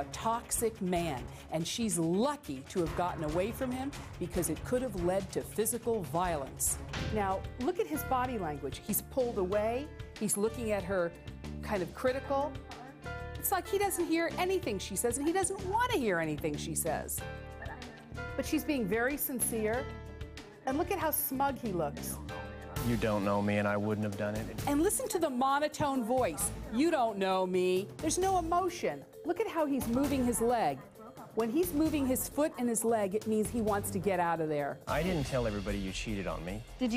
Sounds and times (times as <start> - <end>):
Music: 0.0 - 36.9.